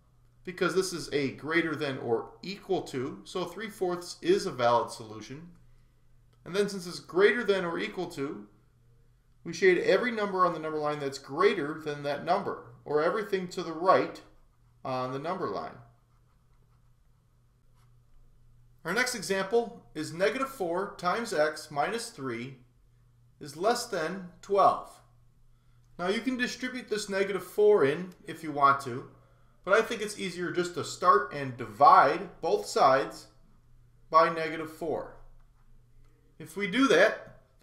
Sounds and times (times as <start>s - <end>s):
Speech: 0.5s - 5.6s, 6.4s - 8.5s, 9.4s - 15.9s, 18.8s - 22.7s, 23.4s - 25.1s, 26.0s - 33.4s, 34.1s - 35.3s, 36.4s - 37.4s.